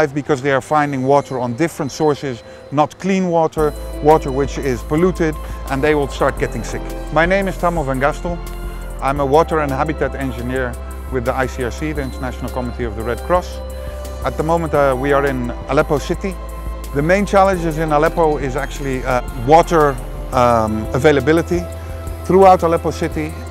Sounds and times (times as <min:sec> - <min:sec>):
Speech: 0:00.0 - 0:08.4, 0:09.0 - 0:13.6, 0:14.2 - 0:16.4, 0:17.0 - 0:21.7, 0:22.3 - 0:23.4
Music: 0:00.0 - 0:23.5.